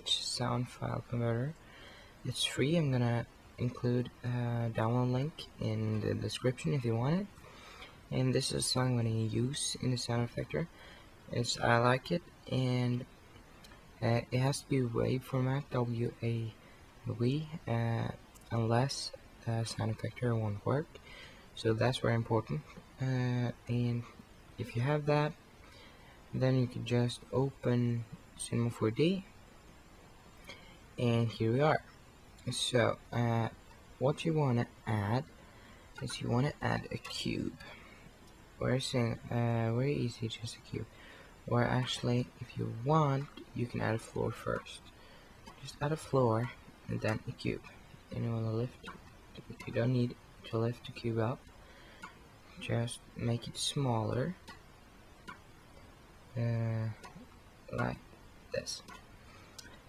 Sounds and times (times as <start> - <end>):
Speech: 0.0 - 1.6, 2.3 - 7.3, 8.1 - 10.7, 11.3 - 13.1, 14.0 - 21.0, 21.6 - 25.4, 26.4 - 29.3, 31.0 - 35.3, 36.0 - 37.8, 38.6 - 40.9, 41.5 - 44.9, 45.6 - 51.4, 52.6 - 54.4, 56.4 - 57.1, 57.7 - 58.9.